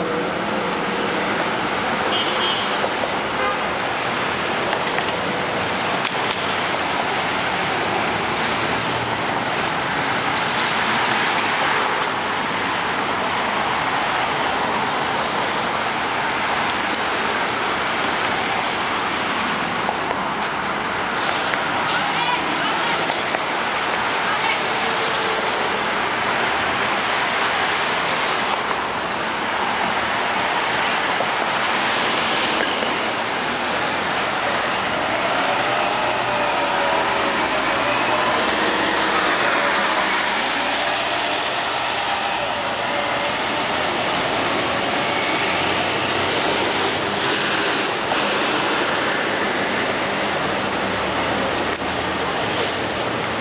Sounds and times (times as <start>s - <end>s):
Bus: 0.0s - 53.4s.